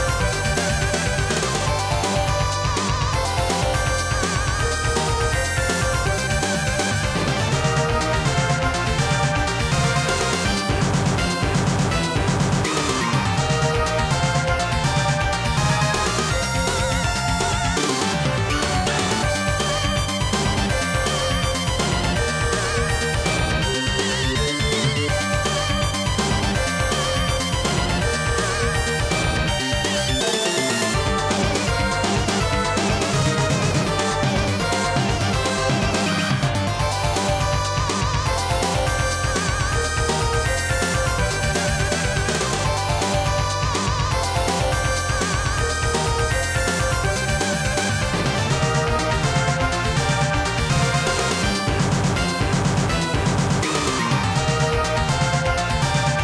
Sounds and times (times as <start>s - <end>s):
Soundtrack music: 0.0s - 56.2s
Video game music: 0.0s - 56.2s.